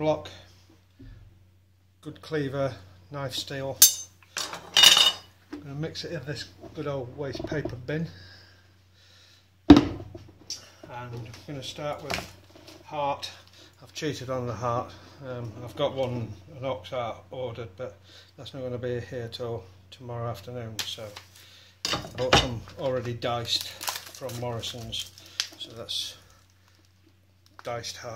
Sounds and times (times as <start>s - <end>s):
Speech: 0.0s - 0.5s, 2.0s - 3.8s, 5.6s - 8.2s, 10.9s - 21.2s, 22.1s - 26.2s, 27.6s - 28.1s.